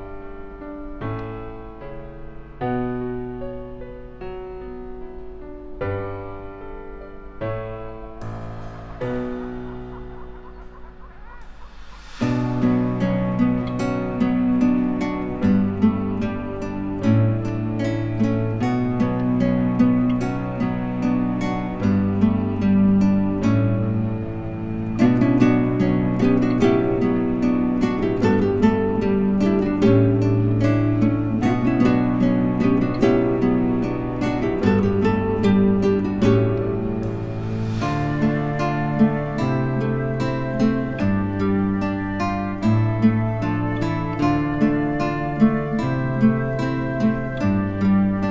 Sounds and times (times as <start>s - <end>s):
Music: 0.0s - 48.3s.